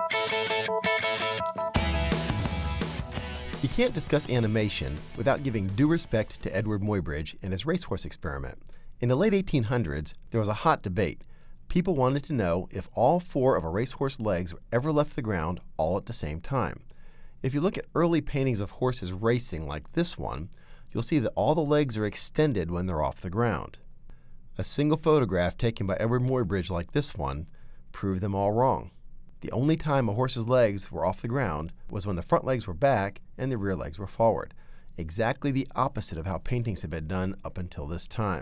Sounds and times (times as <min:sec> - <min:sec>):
Speech: 0:03.6 - 0:23.8, 0:24.6 - 0:38.4.